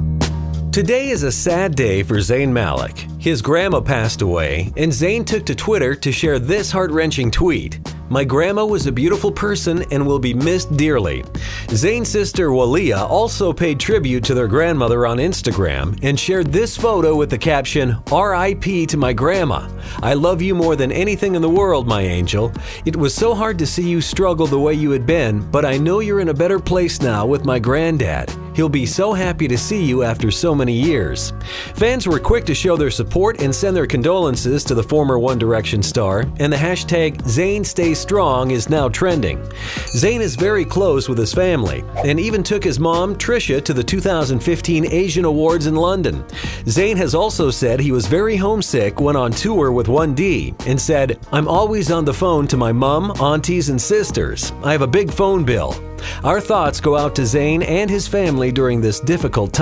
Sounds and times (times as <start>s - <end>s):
Music: 0.0s - 59.6s
Speech: 0.8s - 59.6s.